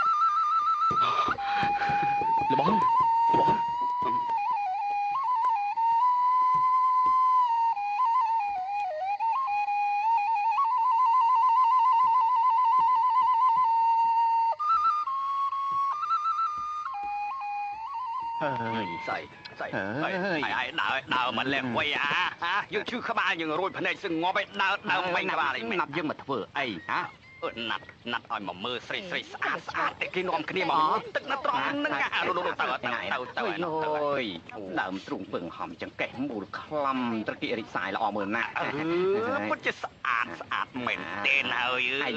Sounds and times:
Music: 0.0 - 21.3
Outside, rural or natural: 0.0 - 42.1.

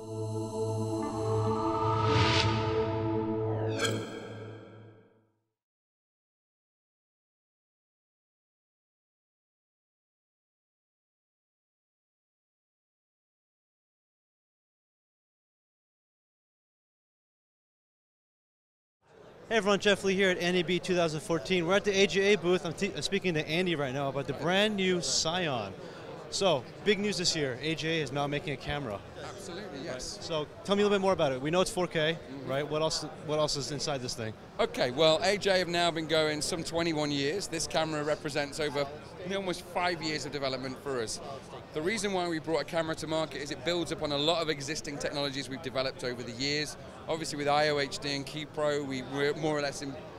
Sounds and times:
Speech: 19.4 - 50.1.

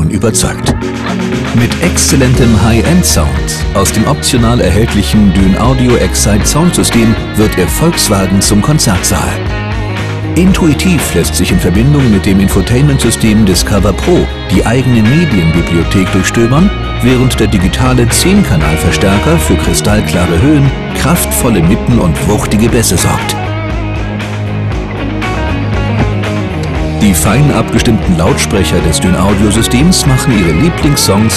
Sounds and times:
Speech: 0.0 - 9.5, 10.4 - 23.4, 27.0 - 31.3
Music: 0.0 - 31.3.

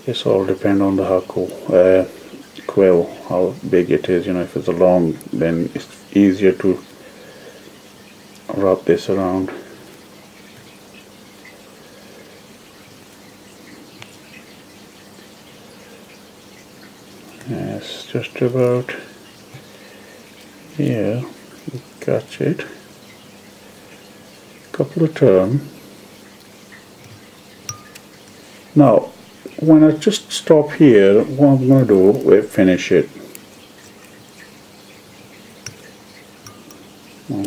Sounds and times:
Speech: 0.0 - 6.8, 8.5 - 9.7, 17.4 - 19.1, 20.8 - 22.8, 24.7 - 25.7, 28.8 - 33.2.

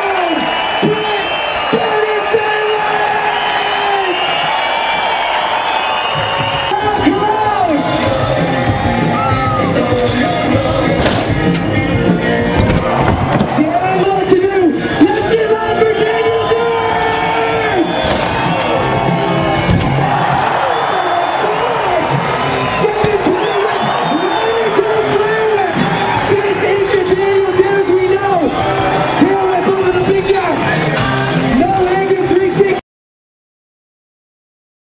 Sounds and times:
Music: 0.0 - 32.8.

